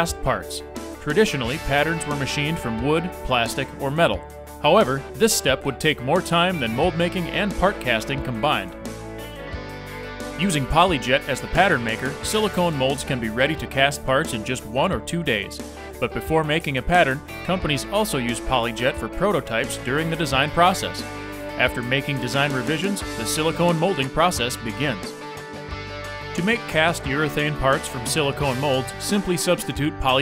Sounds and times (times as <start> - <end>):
Speech: 0.0 - 8.8, 10.4 - 21.0, 21.6 - 25.2, 26.4 - 30.2
Music: 0.0 - 30.2.